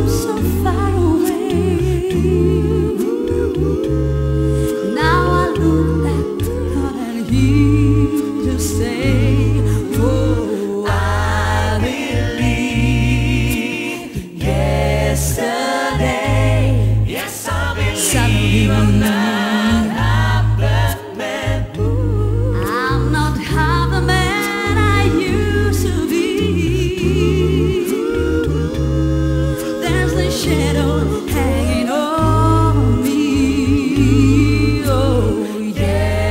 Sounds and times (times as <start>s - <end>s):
Music: 0.0s - 36.3s.